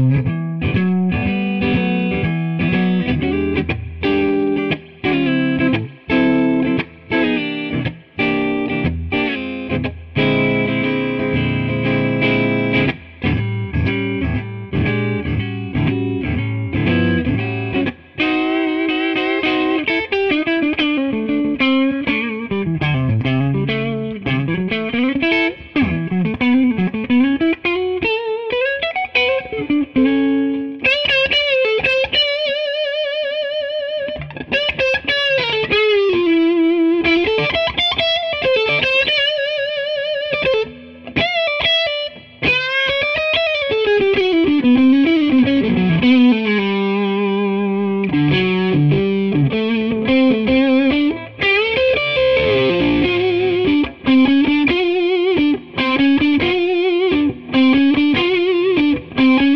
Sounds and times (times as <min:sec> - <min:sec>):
Music: 0:00.0 - 0:59.5.